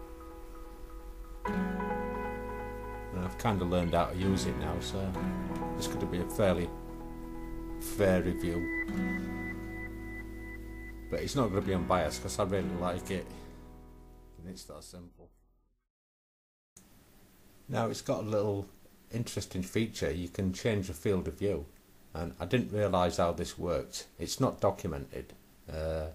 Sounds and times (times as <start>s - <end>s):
Speech: 3.1s - 5.2s, 5.8s - 6.7s, 7.8s - 8.7s, 11.1s - 13.3s, 14.4s - 15.3s, 17.7s - 26.1s.